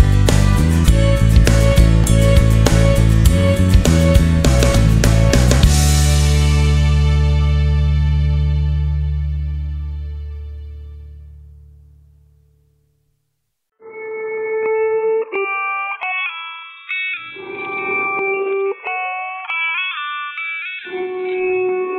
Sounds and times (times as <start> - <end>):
Music: 0.0 - 13.0, 13.7 - 21.9
Inside, small room: 0.0 - 21.9.